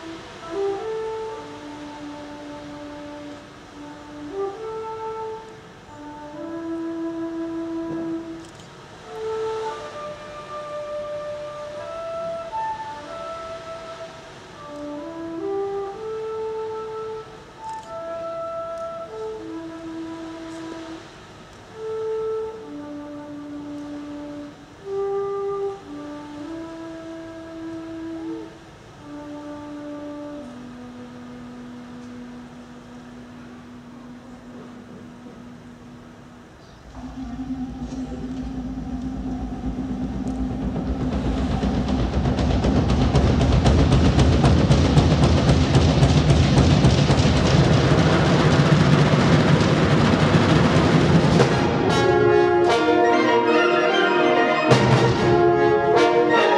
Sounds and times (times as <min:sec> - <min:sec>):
Music: 0:00.0 - 0:56.5
Rustling leaves: 0:00.0 - 0:56.5.